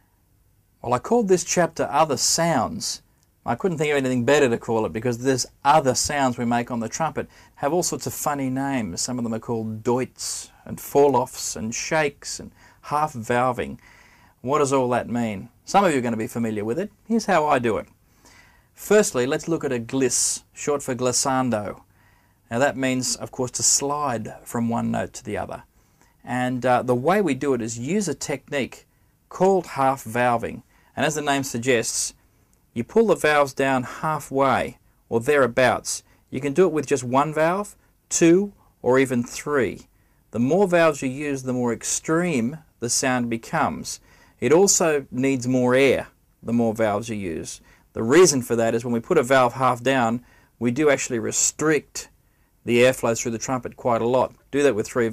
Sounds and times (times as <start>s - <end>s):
Speech: 0.8s - 13.8s, 14.4s - 17.9s, 18.8s - 21.8s, 22.5s - 32.2s, 32.8s - 55.1s.